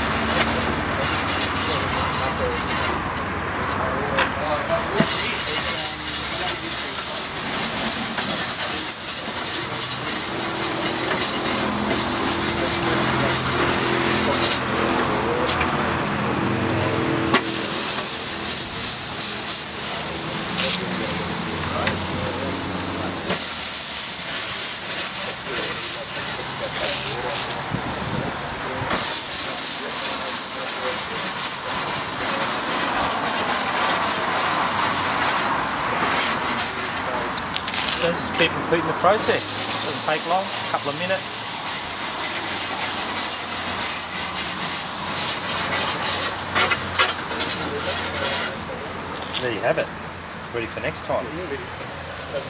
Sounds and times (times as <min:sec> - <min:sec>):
Sizzle: 0:05.0 - 0:12.5, 0:17.4 - 0:20.9, 0:22.7 - 0:26.8, 0:29.0 - 0:35.4, 0:39.2 - 0:48.5
Frying (food): 0:05.0 - 0:14.6, 0:17.3 - 0:37.4, 0:38.8 - 0:49.0.